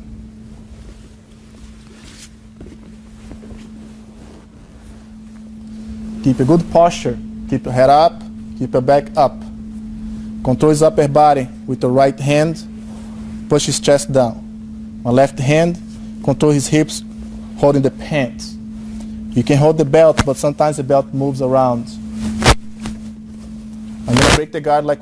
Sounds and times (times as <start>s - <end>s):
Speech: 13.5s - 14.4s, 15.1s - 17.0s, 17.6s - 18.6s, 19.4s - 22.0s, 24.1s - 25.0s.